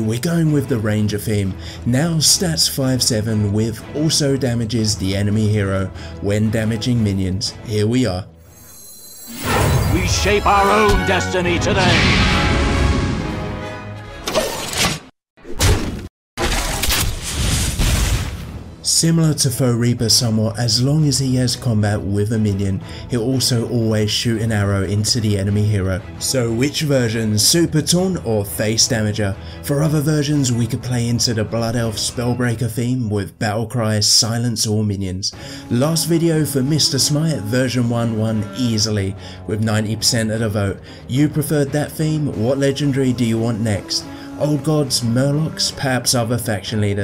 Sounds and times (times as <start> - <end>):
Speech: 0.0 - 8.3, 9.9 - 12.2, 18.8 - 47.0
Music: 0.0 - 15.0, 18.4 - 47.0.